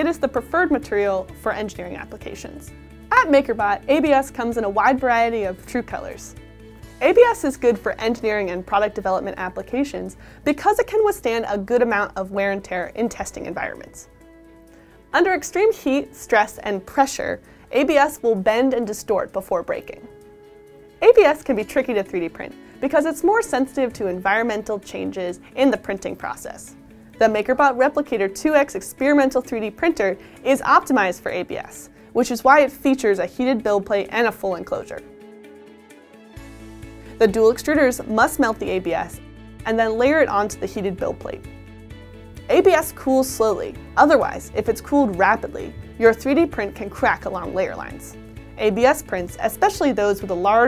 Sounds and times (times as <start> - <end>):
Speech: 0.0 - 6.3, 7.0 - 14.1, 15.2 - 20.1, 21.0 - 35.0, 37.2 - 41.4, 42.5 - 50.6
Music: 0.0 - 50.6.